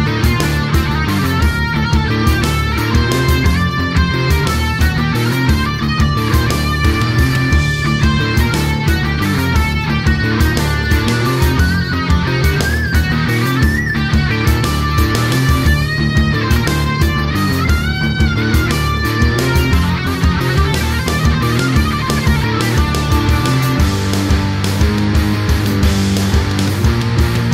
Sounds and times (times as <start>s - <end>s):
Heavy metal: 0.0s - 27.5s.